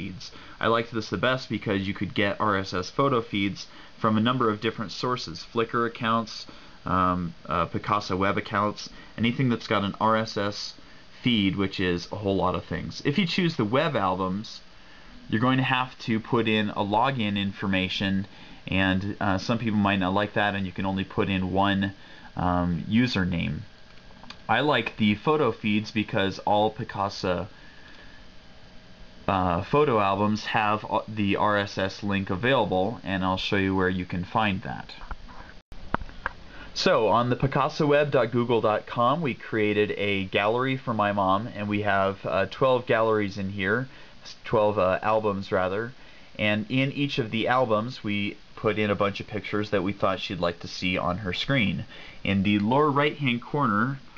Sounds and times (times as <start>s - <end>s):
Speech: 0.0s - 14.7s, 15.3s - 23.7s, 24.3s - 27.6s, 29.2s - 35.1s, 36.8s - 54.1s
Inside, small room: 0.0s - 54.1s.